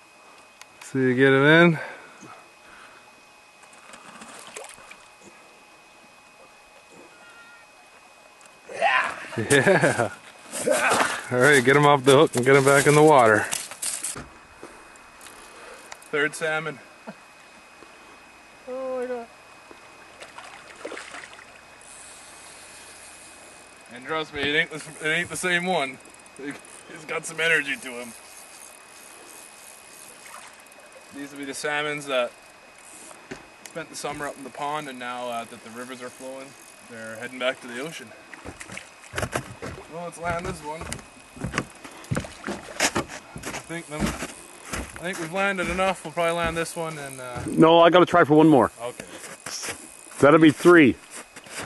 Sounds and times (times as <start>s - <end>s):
Outside, rural or natural: 0.0s - 51.6s.